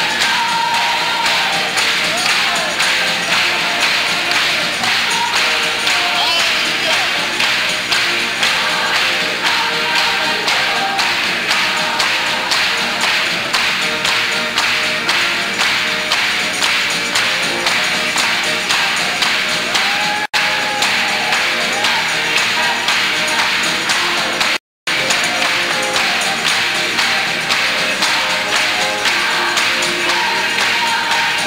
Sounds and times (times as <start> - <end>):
Choir: 0.0 - 31.4.